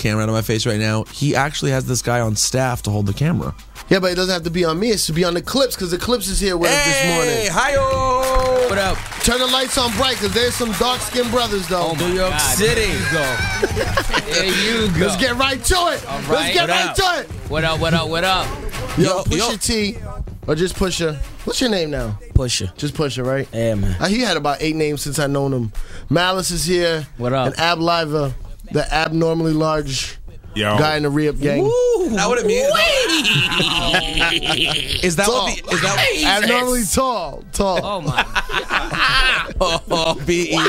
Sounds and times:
Speech: 0.0 - 13.2, 14.2 - 38.1, 40.2 - 40.6
Music: 0.0 - 40.6.

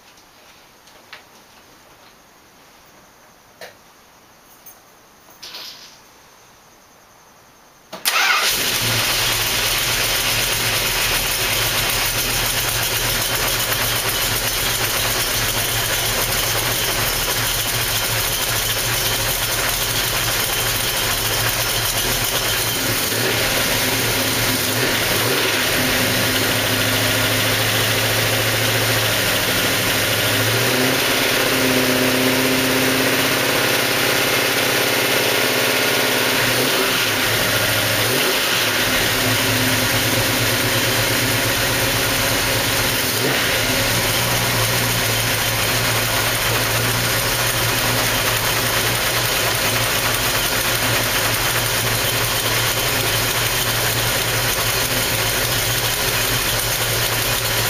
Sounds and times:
Engine: 7.9 - 57.7.

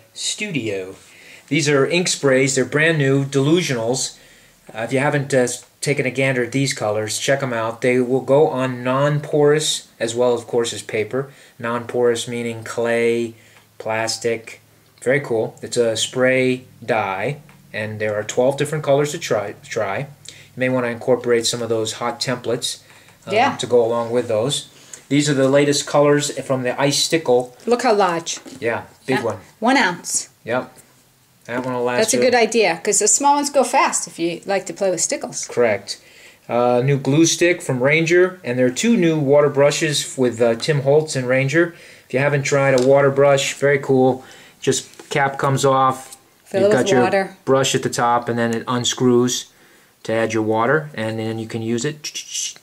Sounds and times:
Speech: 0.0 - 30.8, 31.5 - 52.6.

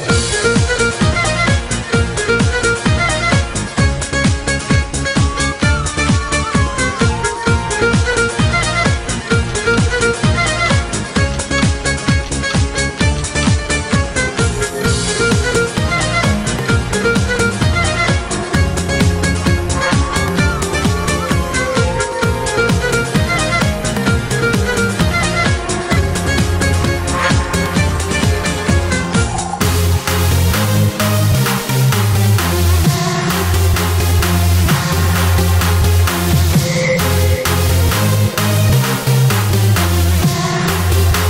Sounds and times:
Electronic dance music: 0.0 - 41.2.

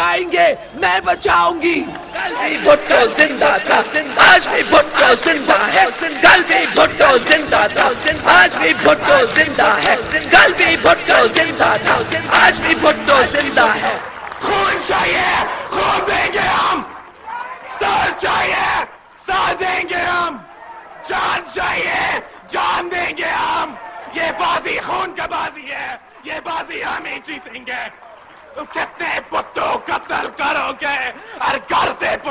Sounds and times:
Male speech, man speaking: 0.0 - 10.5, 11.1 - 20.4, 21.1 - 28.0, 28.6 - 32.3
Narration, monologue: 28.6 - 32.3.

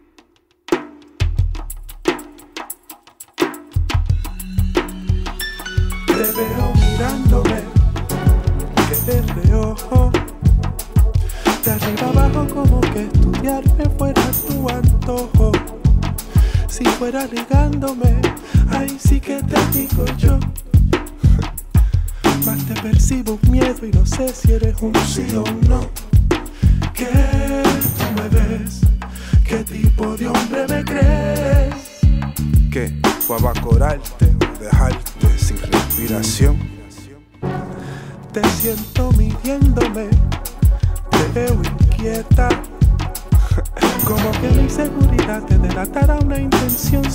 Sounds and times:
Music: 0.0 - 47.1.

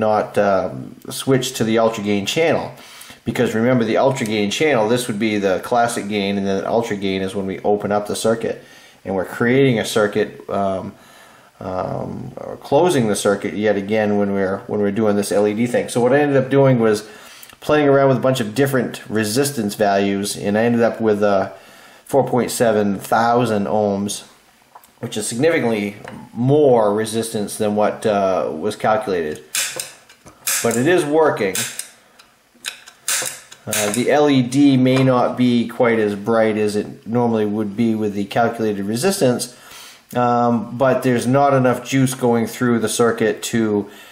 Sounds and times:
Speech: 0.0 - 11.0, 11.6 - 24.4, 25.0 - 29.5, 30.6 - 31.8, 33.6 - 43.9
Inside, small room: 0.0 - 44.1.

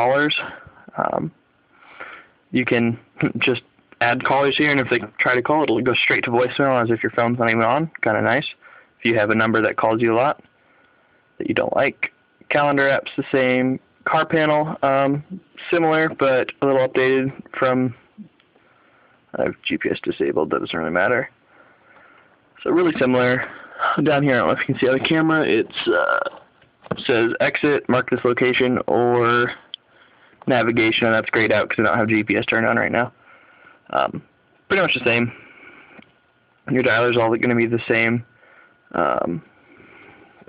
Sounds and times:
Speech: 0.0 - 1.4, 2.5 - 10.4, 11.4 - 18.3, 19.3 - 21.4, 22.6 - 29.7, 30.4 - 33.2, 33.9 - 35.4, 36.6 - 38.3, 38.9 - 39.5
Inside, small room: 0.0 - 40.4.

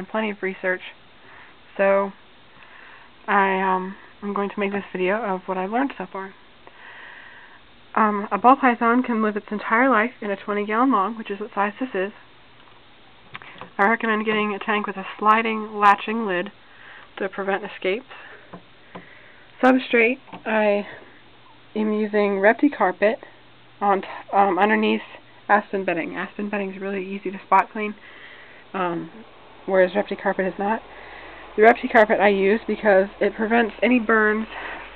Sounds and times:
Speech: 0.0 - 1.0, 1.7 - 2.2, 3.3 - 6.4, 7.9 - 12.2, 13.8 - 16.6, 17.2 - 18.3, 19.6 - 21.1, 21.8 - 28.0, 28.7 - 30.8, 31.6 - 34.6
Inside, small room: 0.0 - 34.9.

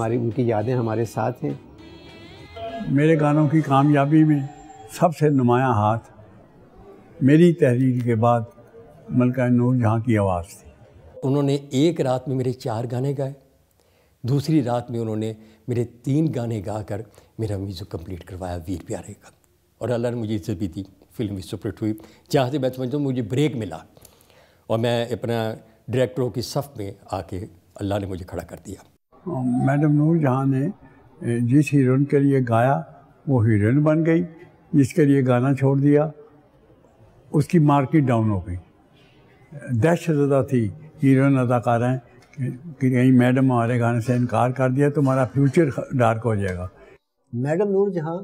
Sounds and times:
Speech: 0.0 - 1.6, 2.8 - 6.1, 7.2 - 13.4, 14.2 - 23.9, 24.7 - 36.2, 37.3 - 38.7, 39.5 - 48.2
Music: 0.0 - 5.0.

